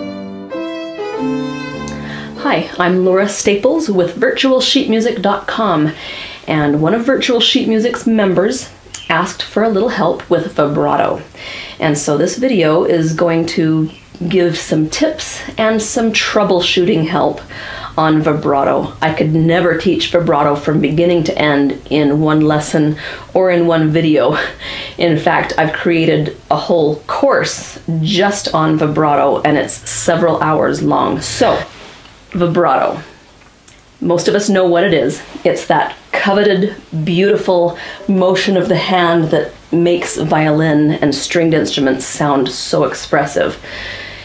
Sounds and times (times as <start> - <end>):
Speech: 2.4 - 31.7, 32.4 - 33.1, 34.0 - 43.6.